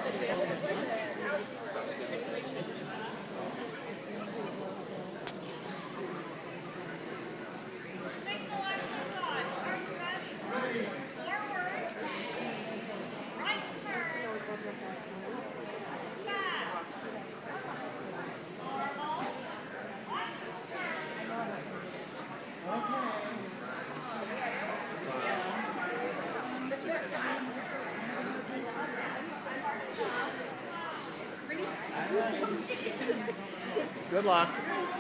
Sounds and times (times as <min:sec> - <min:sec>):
Speech: 0:00.0 - 0:35.0.